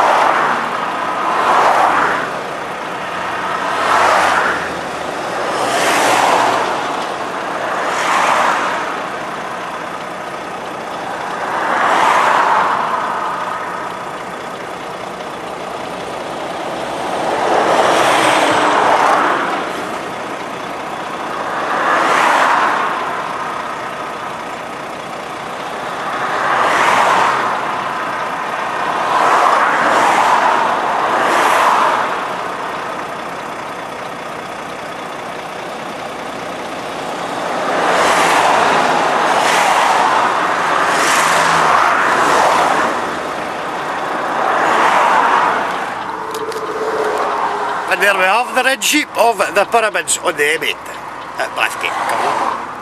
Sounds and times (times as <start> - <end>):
Traffic noise, roadway noise: 0.0 - 52.8
Speech: 47.9 - 52.4.